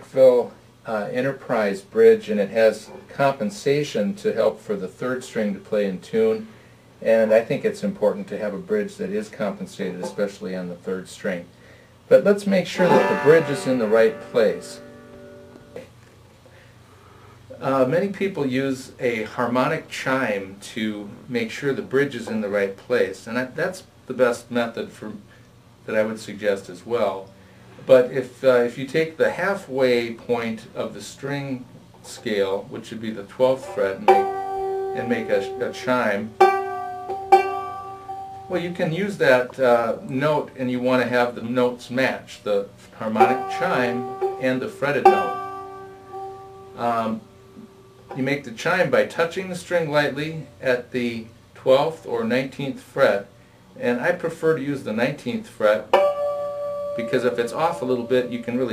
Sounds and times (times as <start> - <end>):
Strum: 12.6 - 16.0, 32.1 - 48.6, 55.9 - 58.7
Banjo: 12.7 - 15.9, 33.5 - 39.5, 43.0 - 47.2.